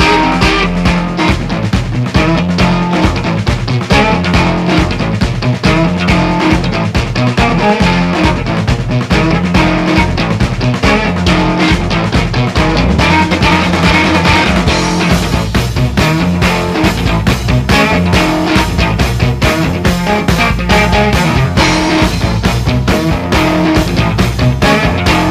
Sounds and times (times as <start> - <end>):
Music: 0.0 - 25.3.